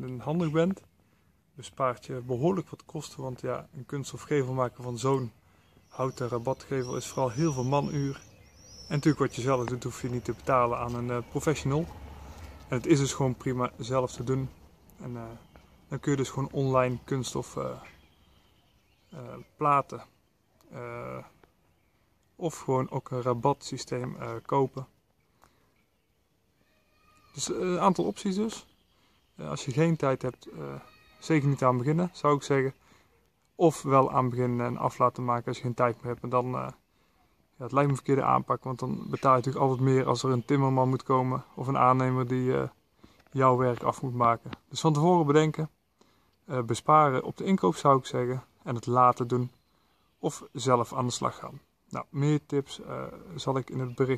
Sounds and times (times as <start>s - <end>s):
Speech: 0.0s - 0.9s, 1.6s - 8.3s, 8.9s - 12.0s, 12.7s - 17.9s, 19.1s - 21.4s, 22.4s - 24.9s, 27.3s - 28.7s, 29.4s - 32.8s, 33.6s - 36.8s, 37.6s - 45.8s, 46.5s - 49.6s, 50.2s - 54.1s.